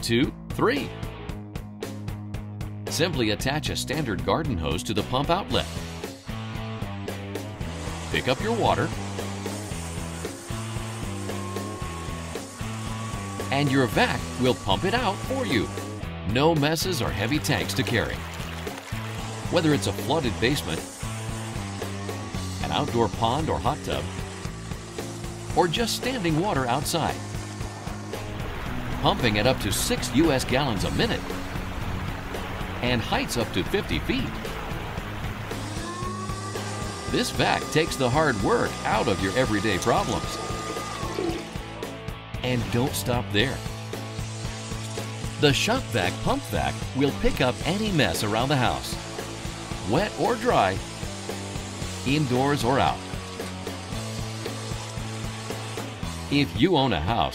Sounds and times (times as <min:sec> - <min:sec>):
Speech: 0:00.0 - 0:01.0, 0:02.9 - 0:05.8, 0:08.2 - 0:08.9, 0:13.5 - 0:18.2, 0:19.5 - 0:20.8, 0:22.6 - 0:24.1, 0:25.6 - 0:27.2, 0:29.0 - 0:31.2, 0:32.8 - 0:34.4, 0:37.1 - 0:40.4, 0:42.4 - 0:43.7, 0:45.4 - 0:49.0, 0:49.8 - 0:50.8, 0:52.0 - 0:53.0, 0:56.3 - 0:57.3
Music: 0:00.0 - 0:57.3
Pump (liquid): 0:07.6 - 0:16.0, 0:17.0 - 0:41.9, 0:42.7 - 0:56.5.